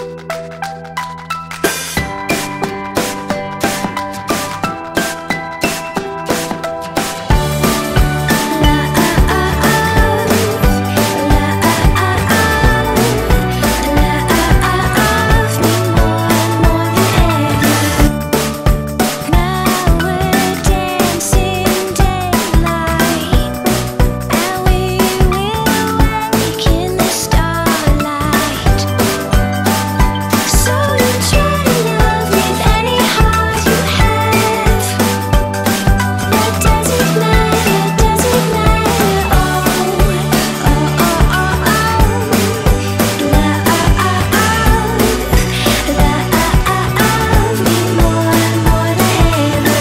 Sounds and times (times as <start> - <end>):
Music: 0.0 - 49.8.